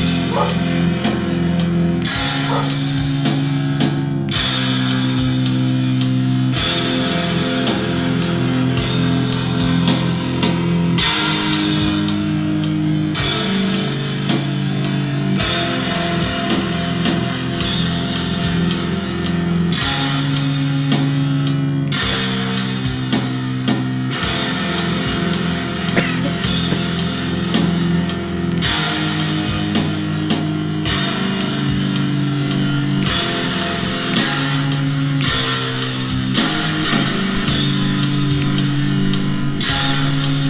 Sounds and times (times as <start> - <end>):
Strum: 23.1 - 40.4.